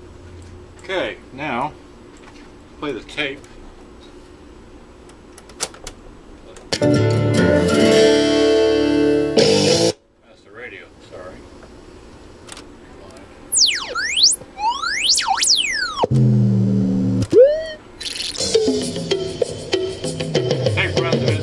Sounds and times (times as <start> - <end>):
Chirp tone: 13.5 - 16.1, 17.3 - 17.8.